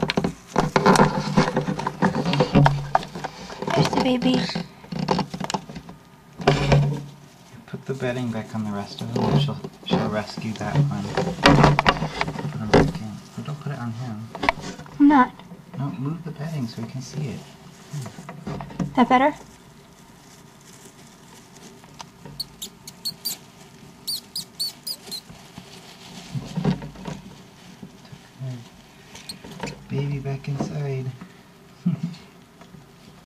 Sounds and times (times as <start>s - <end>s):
Speech: 3.7s - 4.6s, 7.6s - 11.2s, 29.9s - 31.2s
Mouse: 22.4s - 23.4s, 24.1s - 25.3s.